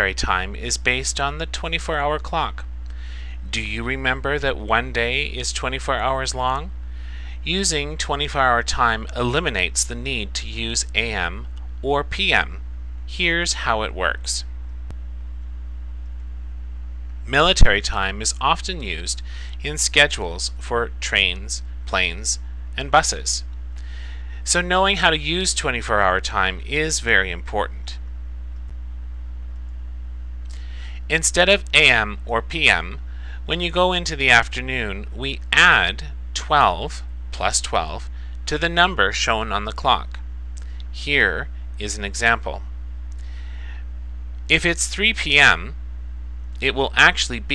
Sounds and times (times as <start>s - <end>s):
Speech: 0.0s - 2.7s, 3.4s - 6.7s, 7.4s - 14.5s, 17.3s - 23.5s, 24.4s - 28.0s, 31.1s - 40.2s, 40.9s - 42.7s, 44.5s - 45.8s, 46.6s - 47.5s.